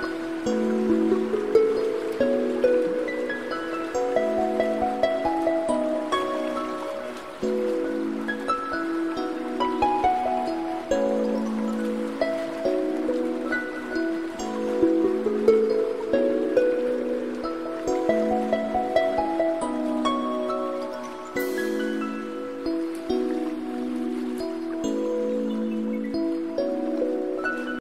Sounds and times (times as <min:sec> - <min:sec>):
Music: 0:00.0 - 0:27.8
Outside, rural or natural: 0:00.0 - 0:27.8.